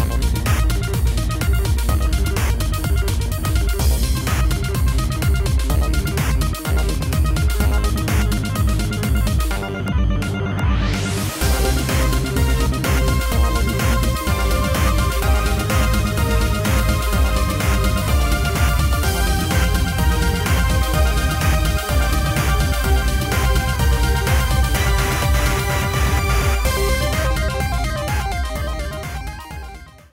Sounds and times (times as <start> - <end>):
Music: 0.0 - 30.1.